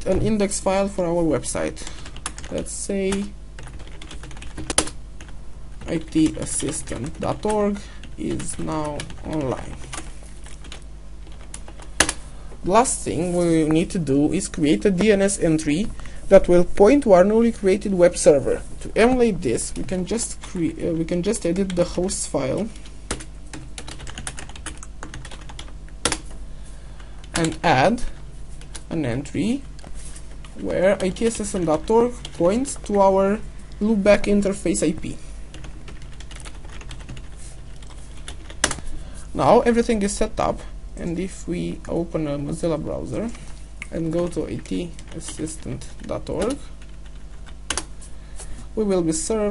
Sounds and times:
Typing: 3.6s - 5.0s, 23.1s - 26.2s, 35.6s - 38.8s.

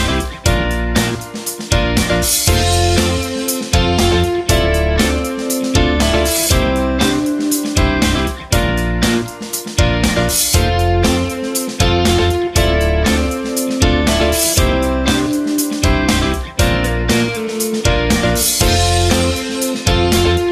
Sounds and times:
Music: 0.0s - 20.5s.

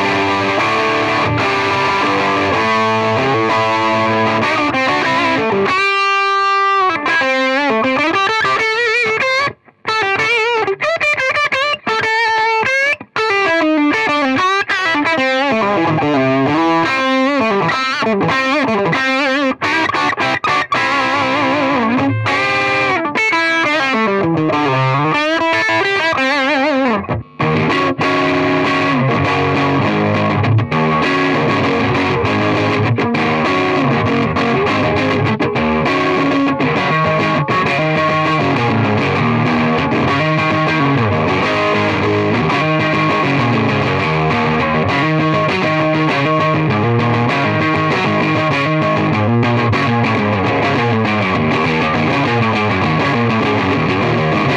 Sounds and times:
Guitar: 0.0s - 54.5s.

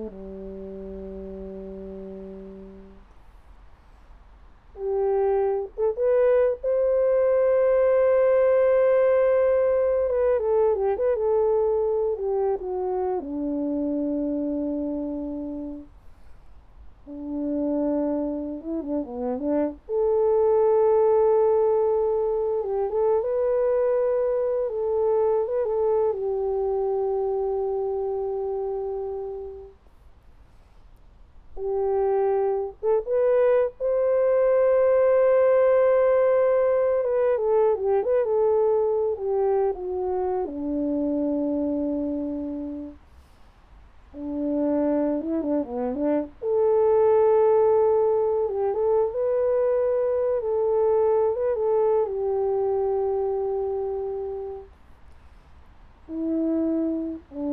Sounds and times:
French horn: 0.0s - 57.5s.

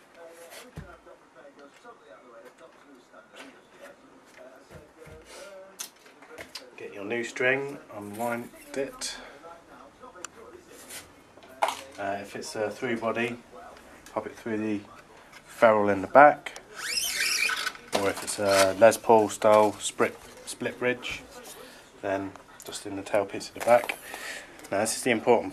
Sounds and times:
Speech: 0.0s - 16.8s, 17.9s - 25.5s.

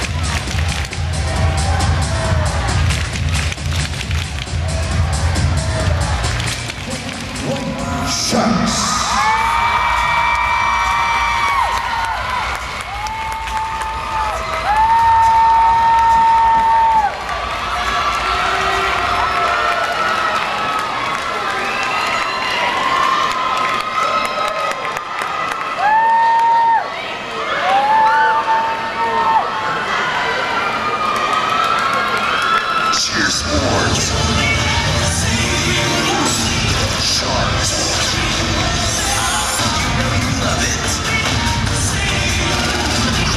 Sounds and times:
Cheering: 0.0s - 43.3s.

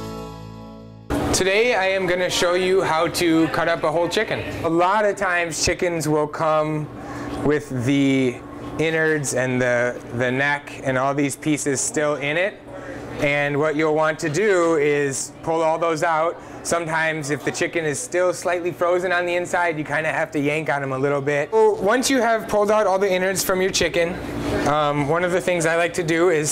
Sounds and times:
Speech: 1.4s - 26.5s.

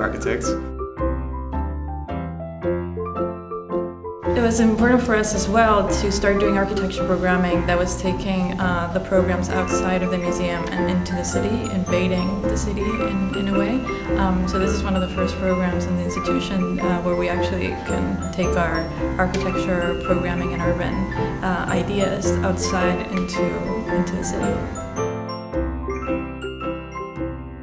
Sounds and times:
Speech: 0.0s - 0.6s, 4.4s - 24.6s
Music: 0.0s - 27.6s.

